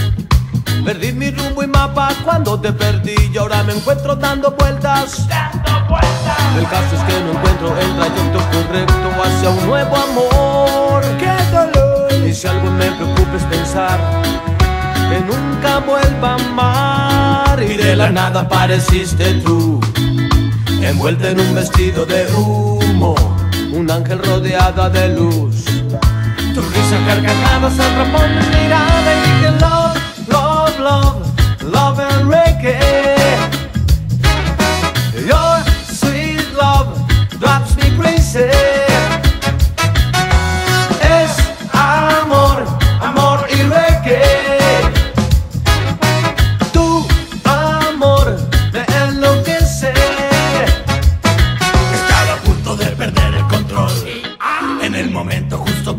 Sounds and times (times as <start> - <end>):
Music: 0.0 - 55.9.